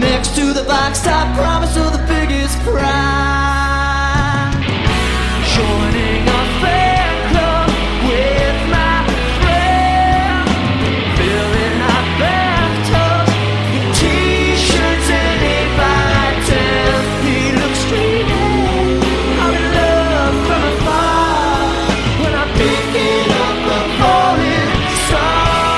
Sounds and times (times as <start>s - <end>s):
Music: 0.0s - 25.7s.